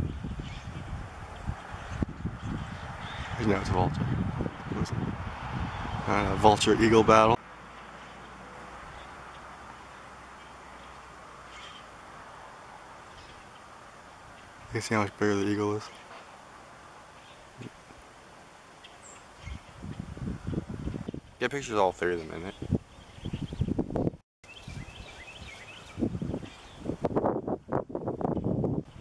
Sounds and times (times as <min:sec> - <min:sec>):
Speech: 0:03.4 - 0:04.0, 0:06.1 - 0:07.4, 0:14.7 - 0:15.9, 0:21.4 - 0:22.7.